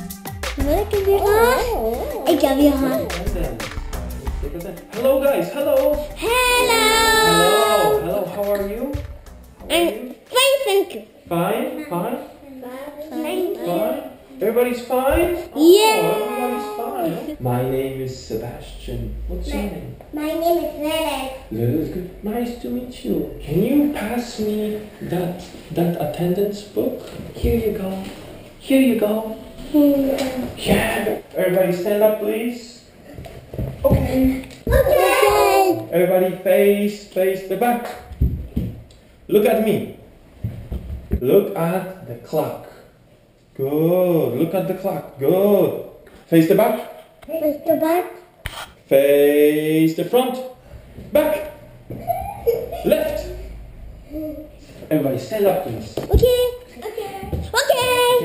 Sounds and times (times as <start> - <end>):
Speech: 15.2 - 19.6.